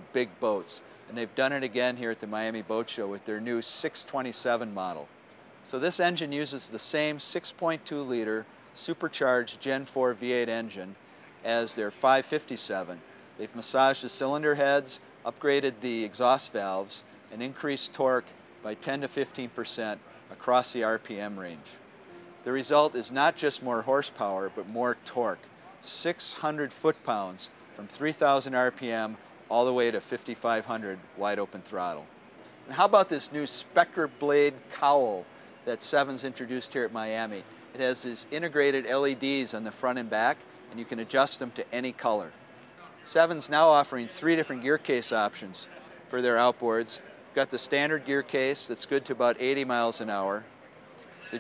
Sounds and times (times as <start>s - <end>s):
Speech: 0.0s - 5.1s, 5.7s - 21.8s, 22.5s - 32.1s, 32.7s - 50.5s.